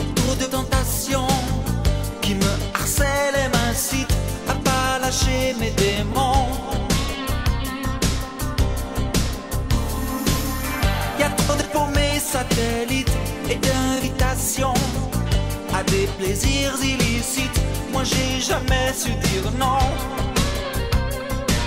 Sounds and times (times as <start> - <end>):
Jazz: 0.0 - 21.6
Rhythm and blues: 0.0 - 21.6.